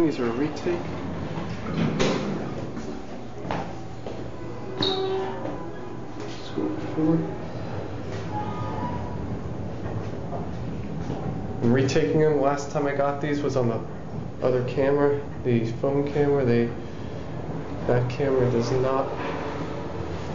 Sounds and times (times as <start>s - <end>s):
Speech: 0.0s - 0.9s, 11.6s - 16.8s, 17.9s - 19.1s.